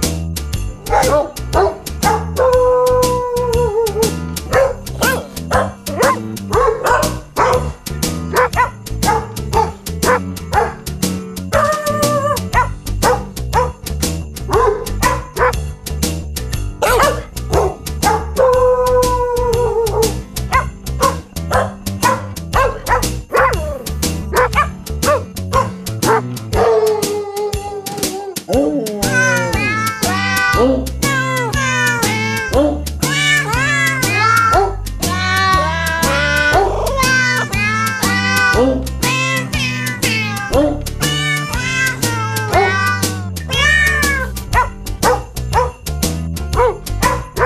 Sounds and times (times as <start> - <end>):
Music: 0.0 - 47.4.